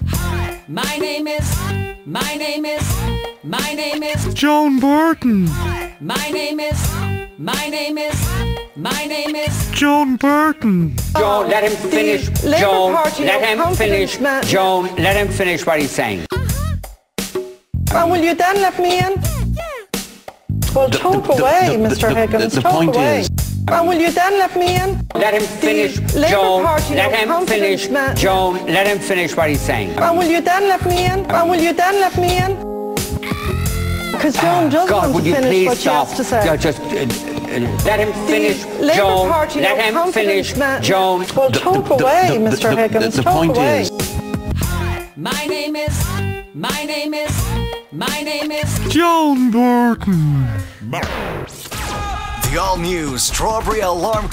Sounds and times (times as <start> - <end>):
Music: 0.0 - 54.3
Speech: 12.4 - 16.5, 17.9 - 19.3, 20.7 - 25.0, 34.2 - 37.1, 38.8 - 43.9, 48.9 - 50.3.